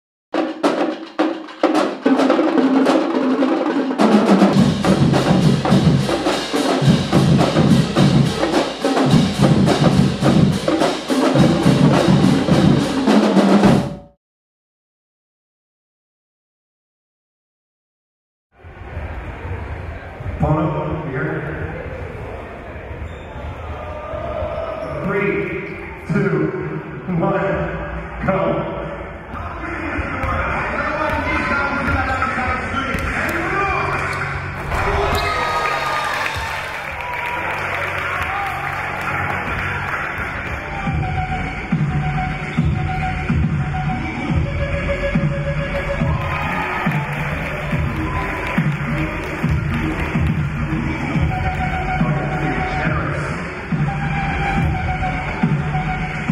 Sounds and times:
Speech: 0:29.4 - 0:34.2.

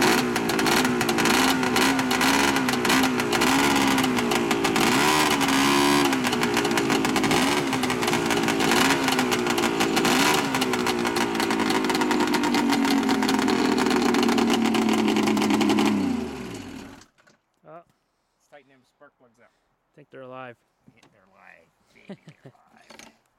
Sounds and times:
Vehicle: 0:00.0 - 0:17.1
Outside, rural or natural: 0:00.0 - 0:18.8, 0:19.6 - 0:23.3
Speech: 0:18.5 - 0:22.9.

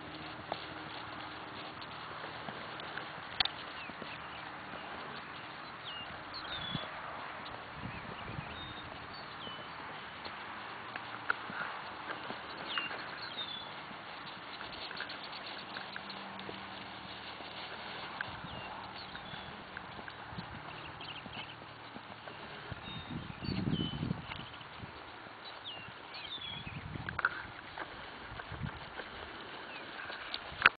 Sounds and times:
Clip-clop: 0:00.0 - 0:30.7.

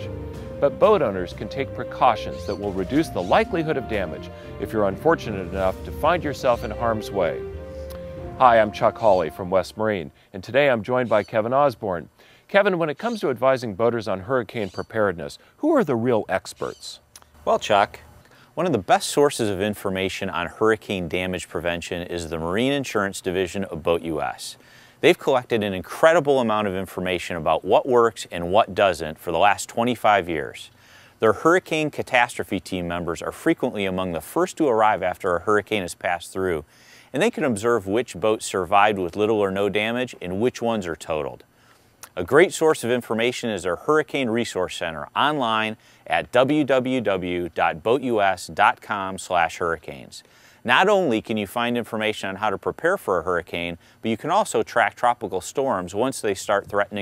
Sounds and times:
Music: 0:00.0 - 0:10.1
Speech: 0:00.6 - 0:07.4, 0:08.4 - 0:41.4, 0:42.1 - 0:57.0.

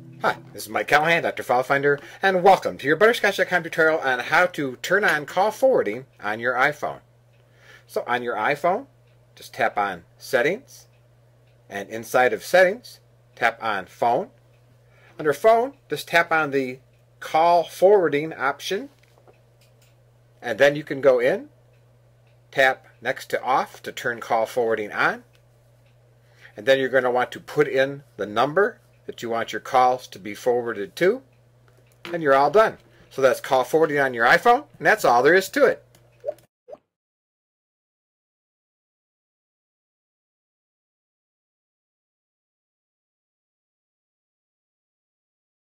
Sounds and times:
Speech: 0:00.2 - 0:07.0, 0:07.9 - 0:10.9, 0:11.7 - 0:14.4, 0:15.2 - 0:19.0, 0:20.4 - 0:21.5, 0:22.5 - 0:25.3, 0:26.6 - 0:31.3, 0:32.1 - 0:35.8.

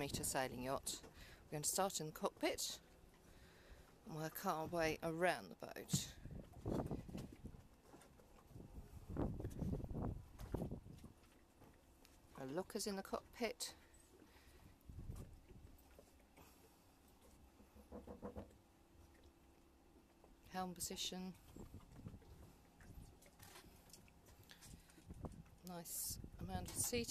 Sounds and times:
Speech: 0:00.0 - 0:02.8, 0:04.1 - 0:06.2, 0:12.4 - 0:13.8, 0:20.5 - 0:21.4, 0:25.6 - 0:27.1.

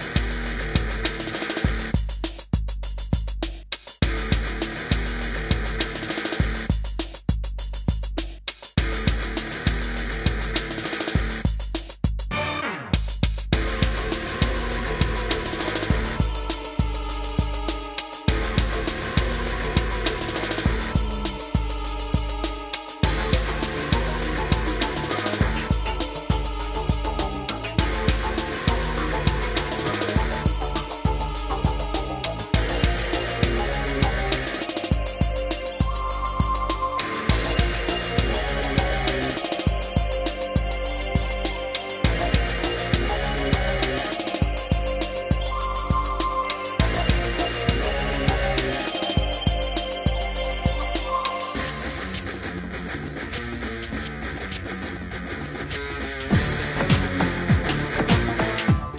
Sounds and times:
Rhythm and blues: 0:00.0 - 0:58.9.

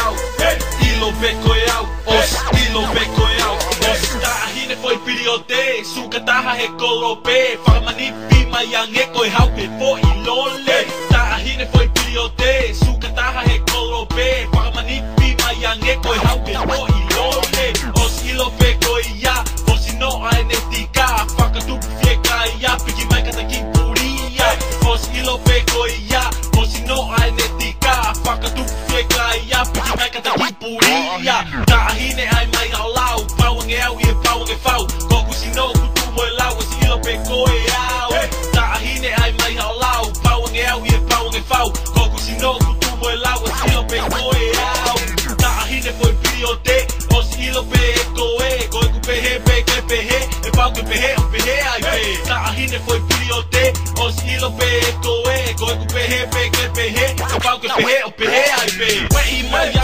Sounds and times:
Music: 0:00.0 - 0:59.8
Rapping: 0:00.0 - 0:59.8.

